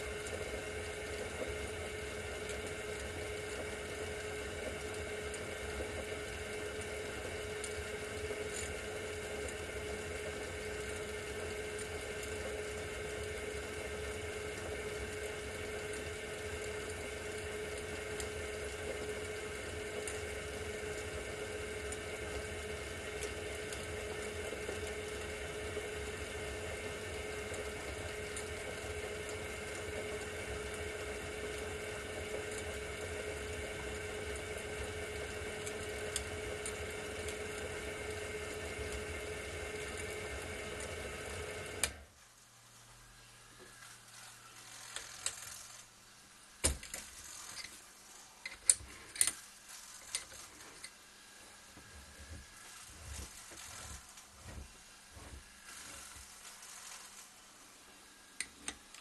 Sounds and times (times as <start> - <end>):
Tools: 46.6 - 47.8, 48.4 - 51.0.